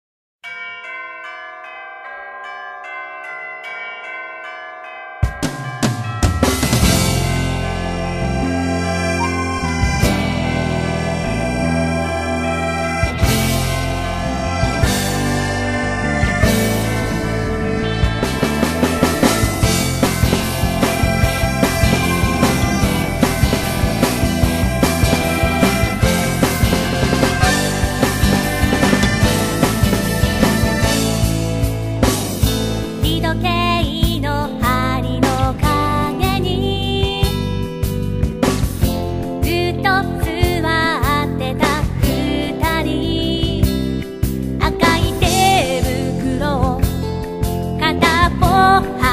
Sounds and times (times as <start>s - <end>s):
Music: 5.2s - 49.1s.